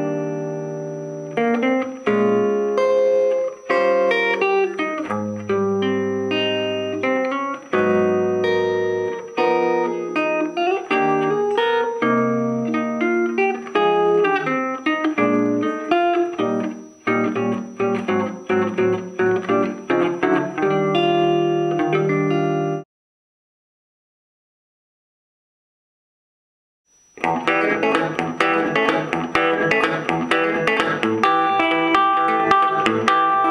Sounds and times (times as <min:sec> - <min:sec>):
Electric guitar: 0:00.0 - 0:22.8, 0:27.2 - 0:33.5.